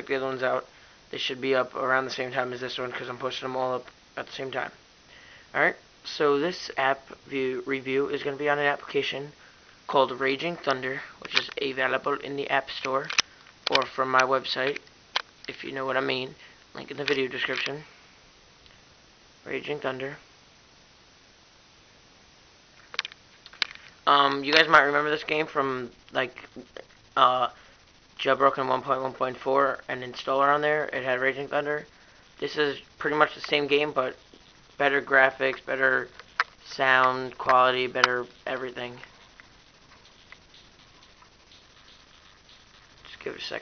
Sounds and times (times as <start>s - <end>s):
Speech: 0.0s - 4.8s, 5.6s - 14.8s, 15.5s - 17.9s, 19.4s - 20.2s, 24.1s - 27.6s, 28.2s - 34.2s, 34.8s - 39.1s, 43.1s - 43.6s.